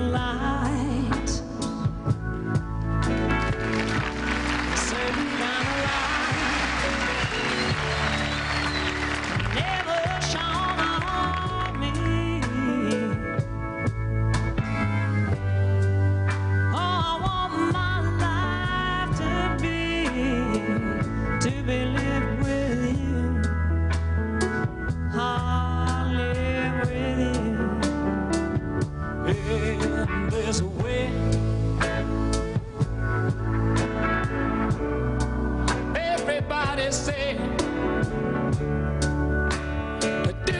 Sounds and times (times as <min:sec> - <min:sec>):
Music: 0:00.0 - 0:40.5.